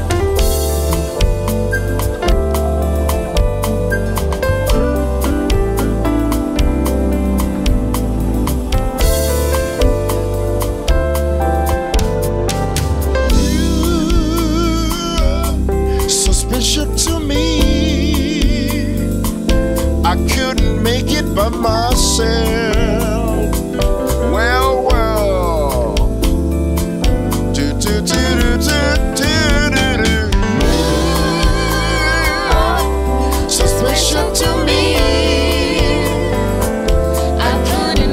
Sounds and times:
Music: 0:00.0 - 0:38.1.

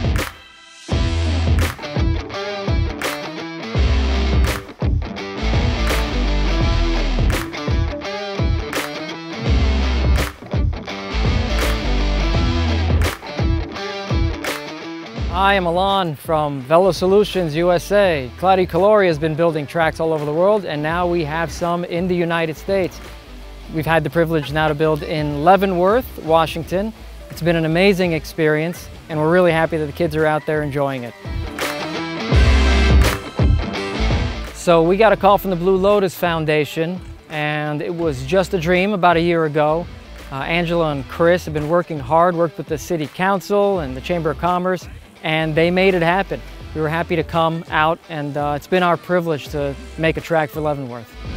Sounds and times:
Music: 0:00.0 - 0:51.3
Speech: 0:15.3 - 0:23.0, 0:23.7 - 0:31.1, 0:34.6 - 0:51.1.

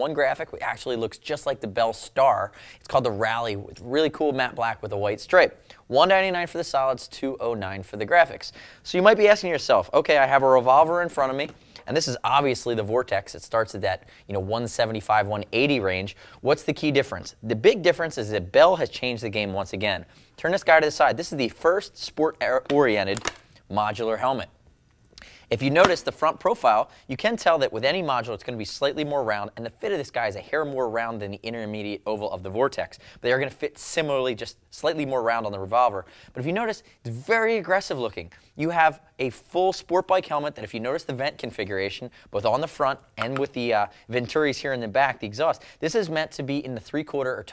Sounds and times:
Speech: 0:00.0 - 0:24.6, 0:25.5 - 0:47.5.

